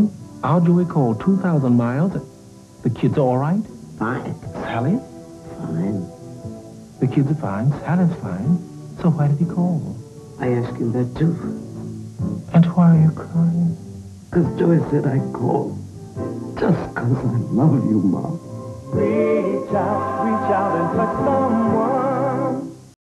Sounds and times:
Music: 0:00.0 - 0:23.0
Speech: 0:16.6 - 0:18.4.

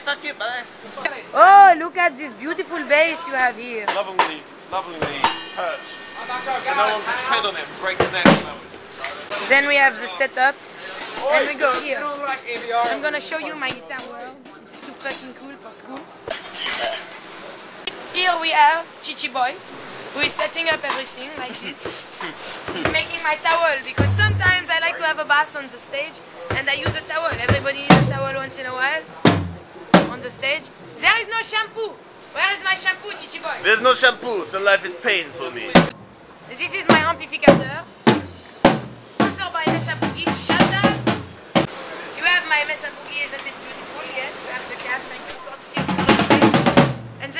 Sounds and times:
Speech: 0:01.0 - 0:16.0, 0:18.1 - 0:21.8, 0:22.8 - 0:29.1, 0:30.0 - 0:31.8, 0:36.5 - 0:37.8, 0:39.2 - 0:41.0, 0:41.8 - 0:46.6
Music: 0:24.0 - 0:24.7, 0:27.5 - 0:28.5, 0:36.8 - 0:41.7, 0:45.8 - 0:47.3.

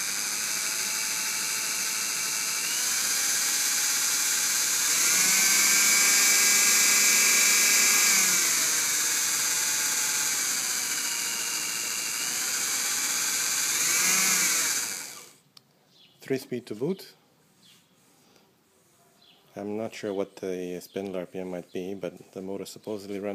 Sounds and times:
Engine: 0:00.0 - 0:15.4.

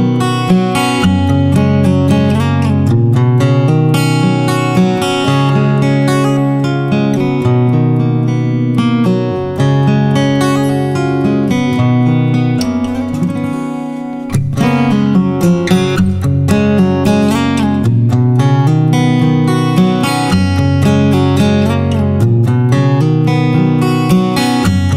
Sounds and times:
Acoustic guitar: 0:00.0 - 0:24.9
Strum: 0:00.0 - 0:24.9.

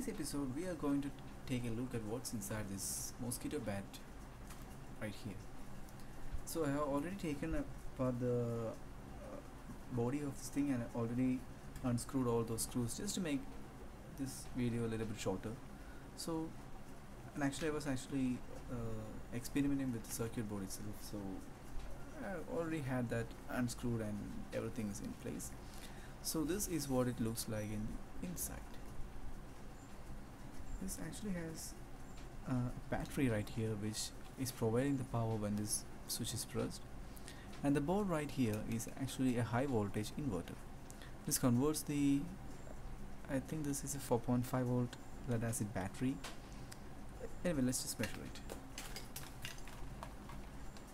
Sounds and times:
Speech: 0:00.0 - 0:04.1, 0:05.0 - 0:05.4, 0:06.5 - 0:13.5, 0:14.2 - 0:15.6, 0:16.2 - 0:16.6, 0:17.4 - 0:21.5, 0:22.1 - 0:25.6, 0:26.2 - 0:28.8, 0:30.8 - 0:31.8, 0:32.4 - 0:36.8, 0:37.6 - 0:40.6, 0:41.3 - 0:42.4, 0:43.3 - 0:46.3, 0:47.2 - 0:48.4.

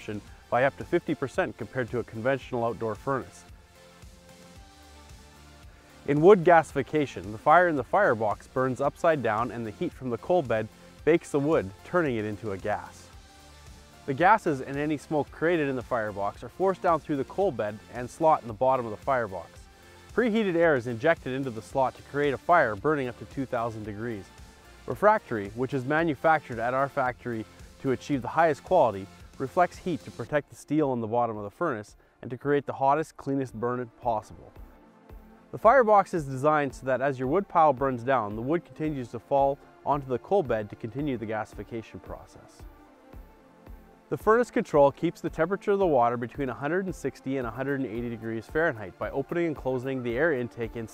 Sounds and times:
Speech: 0:00.0 - 0:03.5, 0:06.1 - 0:13.1, 0:14.1 - 0:19.6, 0:20.2 - 0:24.3, 0:24.9 - 0:34.6, 0:35.6 - 0:42.6, 0:44.2 - 0:50.9
Music: 0:00.0 - 0:50.9.

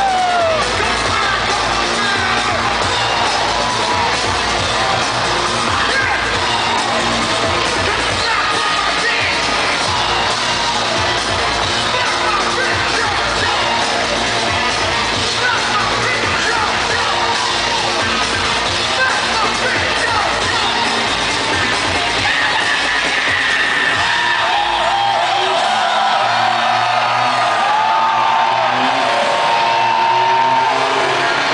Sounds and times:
Crowd: 0:00.0 - 0:31.5
Electronic music: 0:00.0 - 0:31.5.

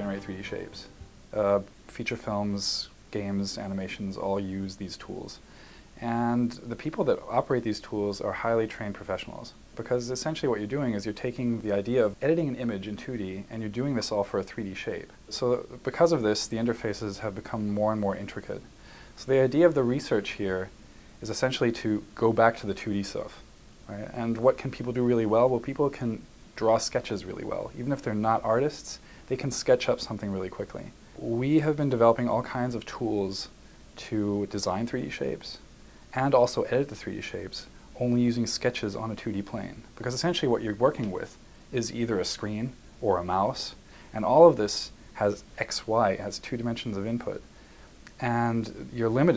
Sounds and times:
Speech: 0:00.0 - 0:47.5, 0:48.1 - 0:49.3.

